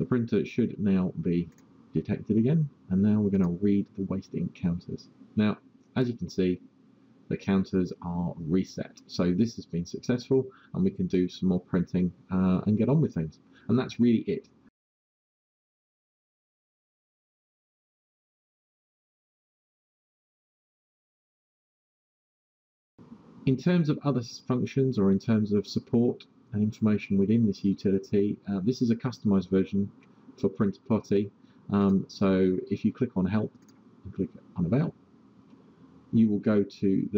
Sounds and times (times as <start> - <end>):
Speech: 0.0 - 6.6, 7.3 - 14.5, 23.5 - 34.9, 36.2 - 37.1.